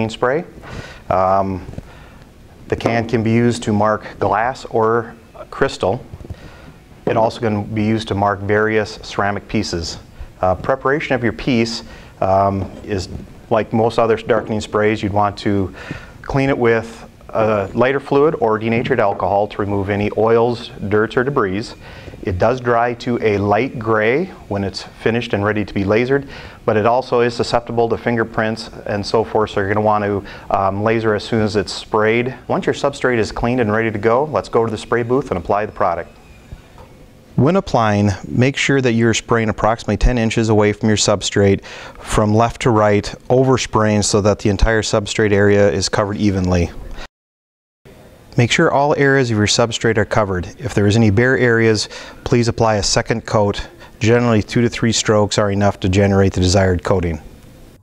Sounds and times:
Speech: 0:00.0 - 0:01.8, 0:02.7 - 0:06.1, 0:07.0 - 0:36.1, 0:37.4 - 0:46.9, 0:48.3 - 0:57.3.

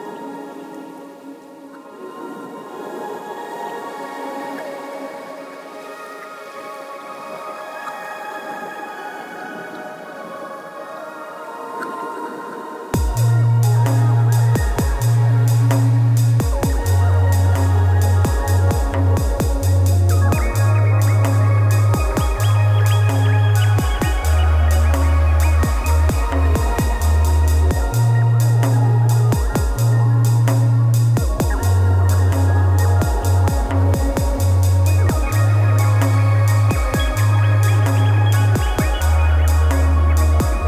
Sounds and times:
Dubstep: 0:13.0 - 0:40.6.

